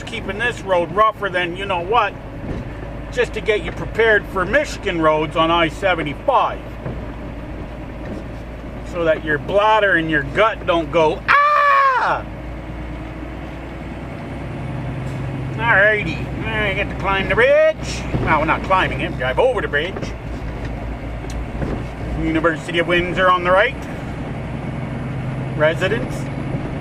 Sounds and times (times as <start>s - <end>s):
Speech: 0.0s - 2.2s, 3.1s - 6.6s, 8.9s - 11.4s, 15.6s - 20.2s, 22.1s - 23.8s, 25.6s - 26.3s
Car: 0.0s - 26.8s
Outside, urban or manmade: 0.0s - 26.8s.